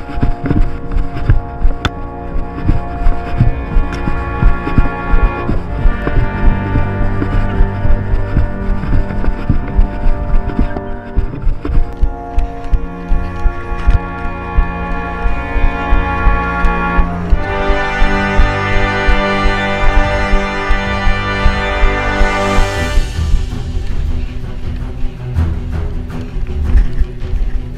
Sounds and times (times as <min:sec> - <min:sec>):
Music: 0:00.0 - 0:27.7
Run: 0:00.0 - 0:27.7.